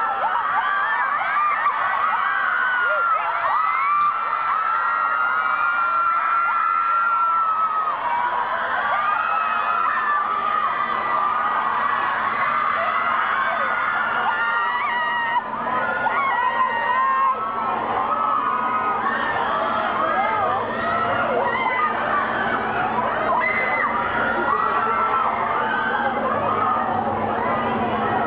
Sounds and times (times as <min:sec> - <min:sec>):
Vehicle: 0:00.0 - 0:28.2
Speech: 0:15.3 - 0:28.2.